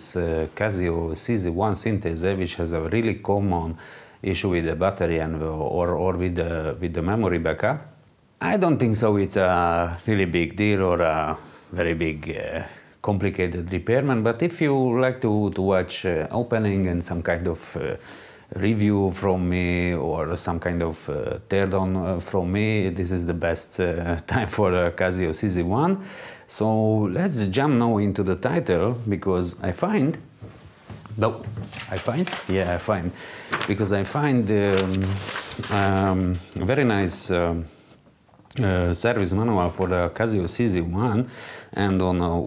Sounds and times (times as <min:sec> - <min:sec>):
Speech: 0:00.0 - 0:30.3, 0:31.1 - 0:37.8, 0:38.5 - 0:42.4.